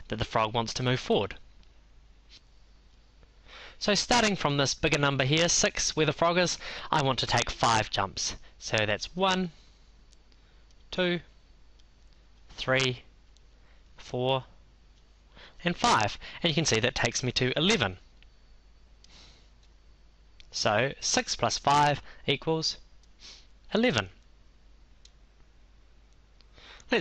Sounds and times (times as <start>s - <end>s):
Speech: 0.0s - 1.4s, 3.8s - 9.6s, 10.9s - 11.3s, 12.5s - 13.1s, 14.0s - 14.5s, 15.6s - 18.0s, 20.5s - 22.8s, 23.7s - 24.2s.